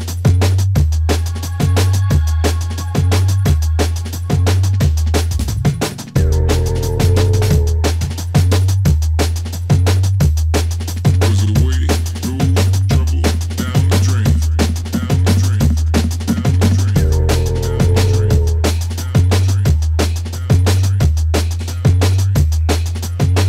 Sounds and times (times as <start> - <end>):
Drum and bass: 0.0 - 23.4.